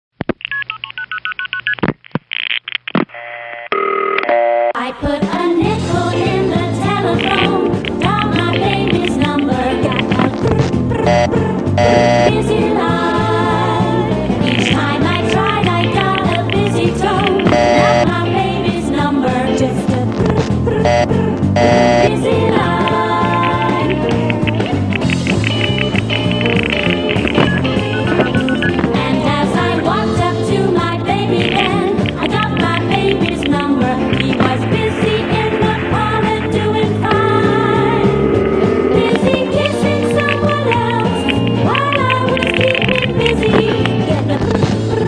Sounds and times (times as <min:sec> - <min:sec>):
Telephone dialing, DTMF: 0:00.4 - 0:01.8, 0:11.1 - 0:12.3, 0:17.5 - 0:18.1, 0:20.9 - 0:22.1, 0:25.5 - 0:28.8
Music: 0:04.8 - 0:45.0.